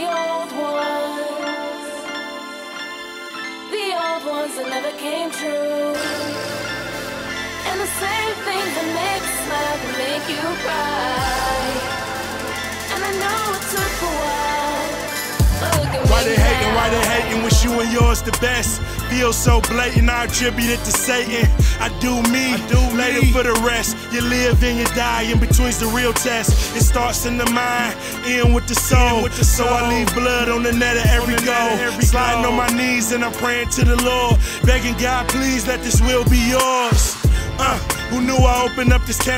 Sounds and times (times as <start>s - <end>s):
Music: 0.0s - 39.3s.